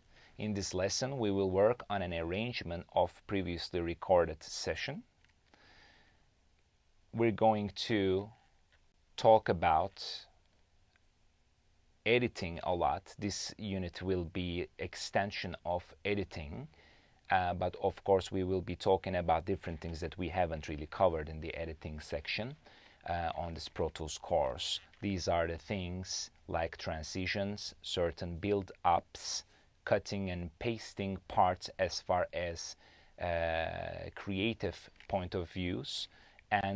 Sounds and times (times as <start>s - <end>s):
Speech: 0.4s - 5.1s, 7.1s - 8.4s, 9.2s - 10.4s, 12.1s - 36.7s.